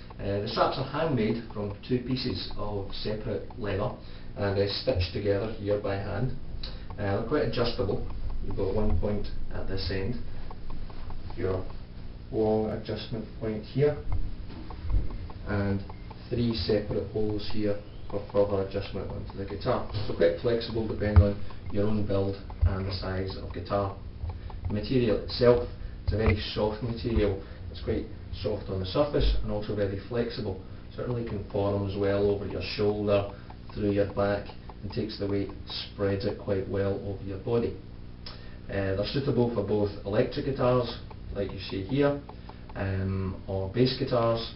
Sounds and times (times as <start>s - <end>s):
Speech: 0.2s - 10.2s, 11.3s - 11.7s, 12.3s - 14.1s, 15.4s - 24.0s, 24.7s - 37.9s, 38.7s - 44.5s.